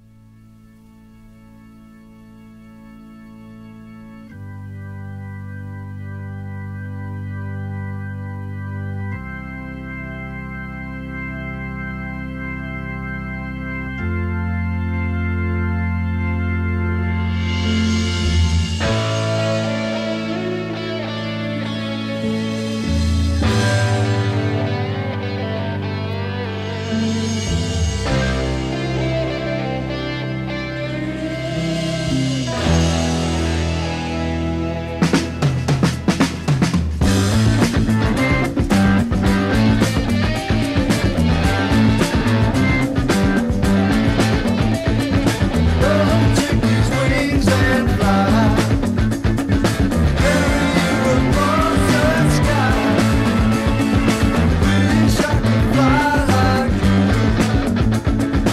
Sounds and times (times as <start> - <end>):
Music: 0.0 - 58.5.